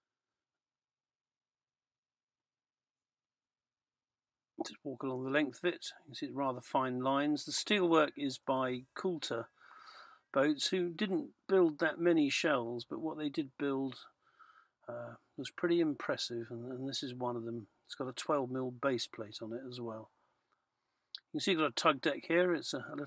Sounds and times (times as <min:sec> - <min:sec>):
Speech: 0:04.6 - 0:09.5, 0:10.3 - 0:14.1, 0:14.9 - 0:20.1, 0:21.2 - 0:23.0.